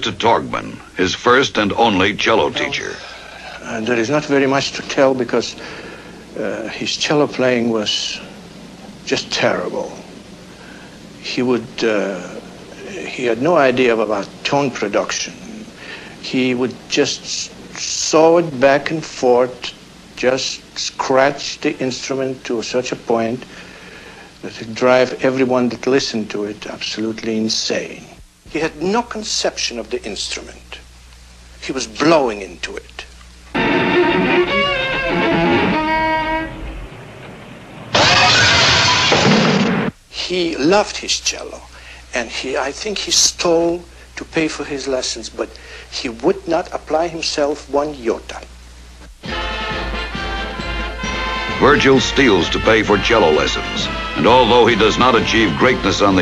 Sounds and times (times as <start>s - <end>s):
Speech: 0.0s - 5.6s, 6.3s - 8.3s, 9.0s - 10.1s, 11.2s - 23.5s, 24.4s - 30.9s, 31.6s - 33.1s, 40.1s - 48.5s, 51.6s - 56.2s.